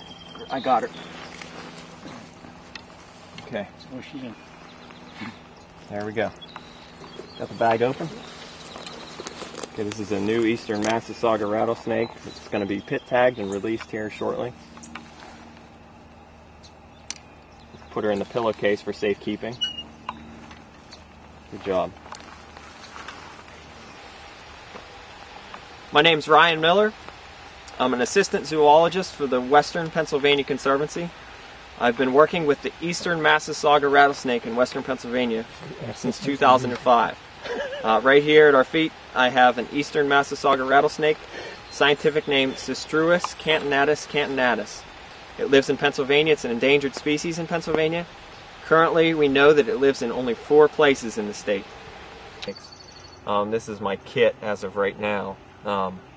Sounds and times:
Outside, rural or natural: 0.0s - 56.1s
Speech: 0.4s - 0.9s, 3.4s - 4.4s, 5.9s - 6.4s, 7.4s - 8.3s, 9.8s - 14.6s, 17.9s - 19.6s, 21.5s - 22.0s, 26.0s - 27.0s, 27.7s - 31.2s, 31.8s - 37.2s, 37.8s - 44.8s, 45.4s - 48.1s, 48.7s - 51.7s, 53.3s - 56.0s.

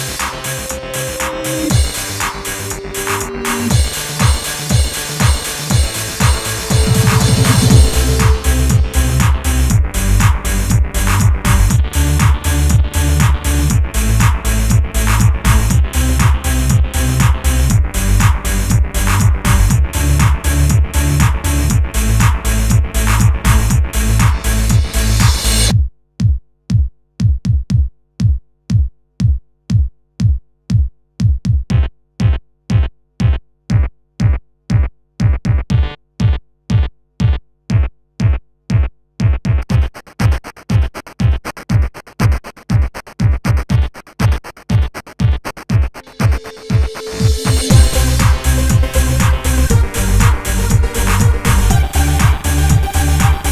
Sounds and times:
Techno: 0.0s - 25.7s, 45.9s - 53.5s.

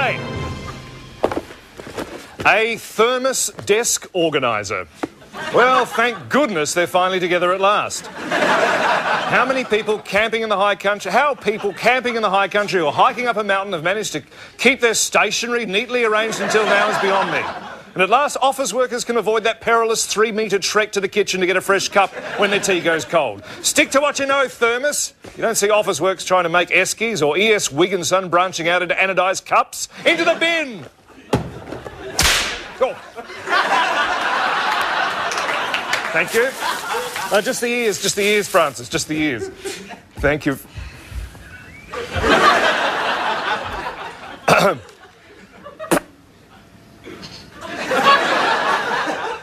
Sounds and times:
Speech: 2.4s - 4.9s, 5.5s - 8.1s, 9.3s - 30.9s, 36.1s - 36.6s, 37.3s - 39.5s, 40.2s - 40.7s.

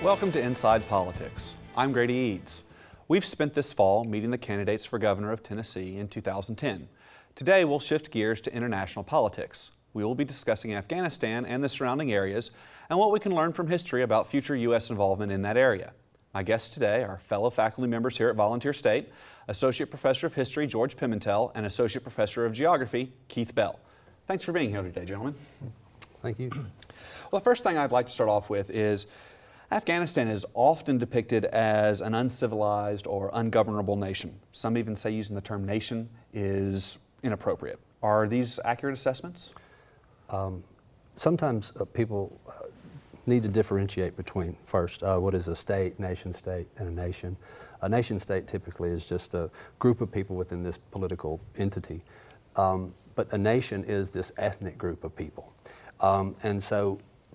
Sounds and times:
Speech: 0.0s - 29.1s, 29.7s - 39.5s, 40.3s - 52.0s, 52.6s - 57.1s.

